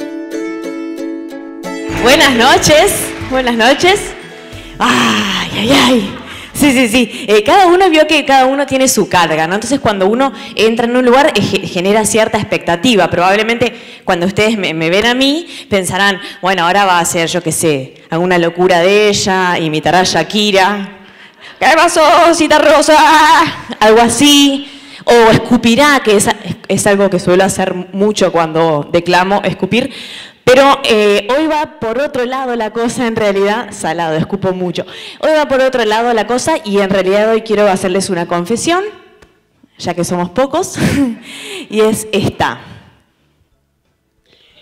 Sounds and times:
Speech: 0:04.8 - 0:20.9, 0:30.5 - 0:39.0.

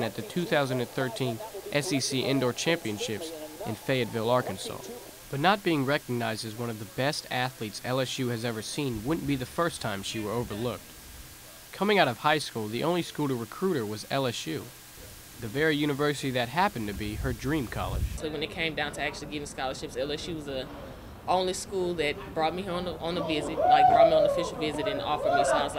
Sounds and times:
Speech: 0:00.0 - 0:10.8, 0:15.4 - 0:25.7.

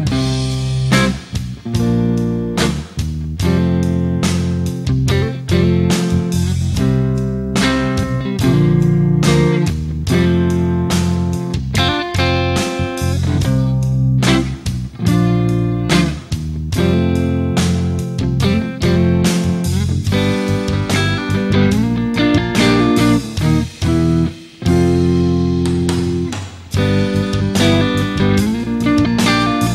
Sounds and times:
Music: 0:00.0 - 0:29.7.

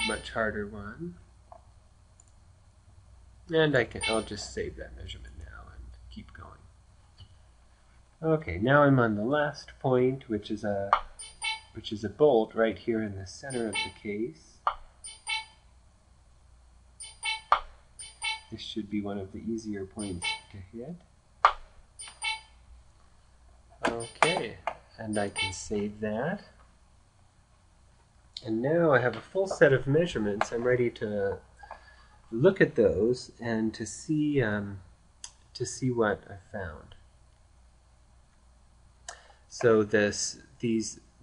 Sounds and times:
Speech: 0:00.0 - 0:01.3, 0:03.5 - 0:06.7, 0:08.2 - 0:11.0, 0:11.8 - 0:14.6, 0:18.6 - 0:21.0, 0:23.8 - 0:26.6, 0:28.4 - 0:31.5, 0:32.3 - 0:34.9, 0:35.6 - 0:37.0, 0:39.5 - 0:41.1.

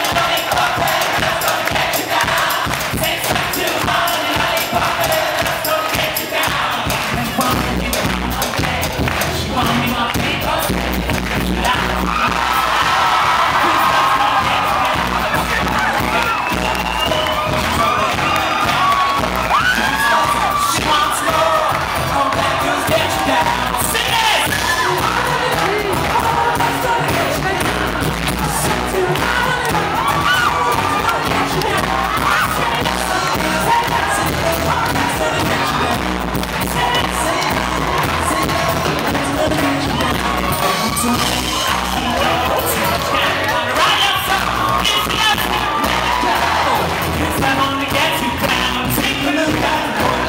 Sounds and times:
Crowd: 0:00.0 - 0:50.2
Music: 0:00.0 - 0:50.2.

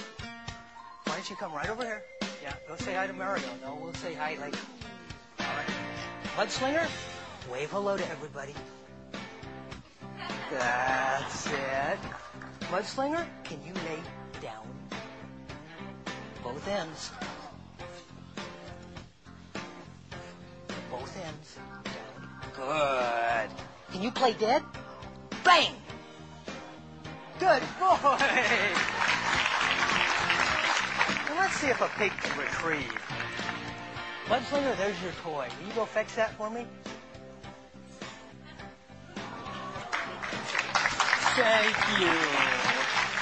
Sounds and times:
Music: 0:00.0 - 0:43.2
Speech: 0:20.9 - 0:24.7, 0:41.2 - 0:42.8.

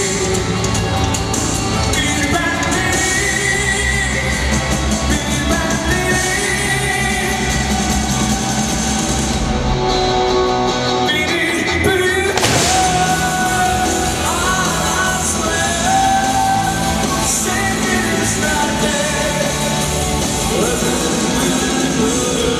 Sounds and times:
Music: 0:00.0 - 0:22.5.

